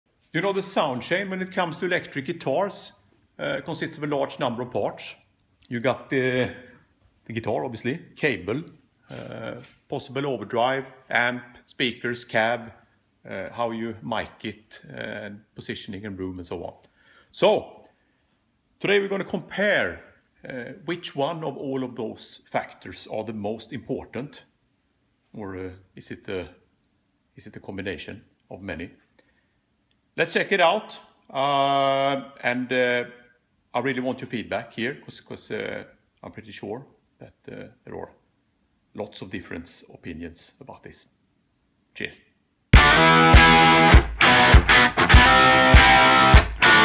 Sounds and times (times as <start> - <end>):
Speech: 0.3 - 17.8, 18.8 - 24.6, 25.3 - 26.6, 27.4 - 29.0, 30.2 - 38.2, 38.9 - 41.2, 41.9 - 42.4.